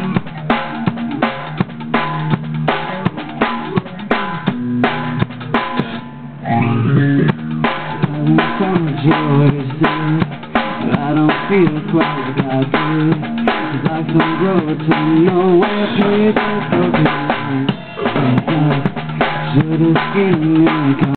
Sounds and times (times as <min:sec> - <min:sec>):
Music: 0:00.0 - 0:21.1.